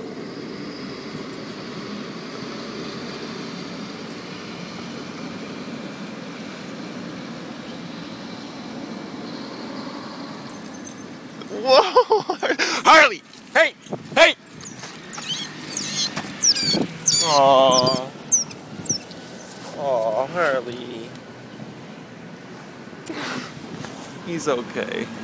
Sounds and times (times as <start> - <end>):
Speech: 12.8 - 14.4, 17.2 - 18.1, 19.8 - 21.2, 24.2 - 25.2
Dog: 14.5 - 19.2.